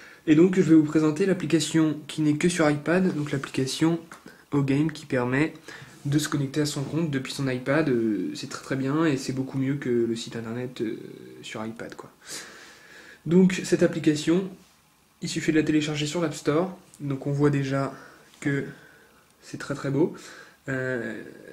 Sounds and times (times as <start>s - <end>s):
Speech: 0.3s - 12.2s, 13.2s - 14.6s, 15.2s - 18.8s, 19.4s - 21.5s.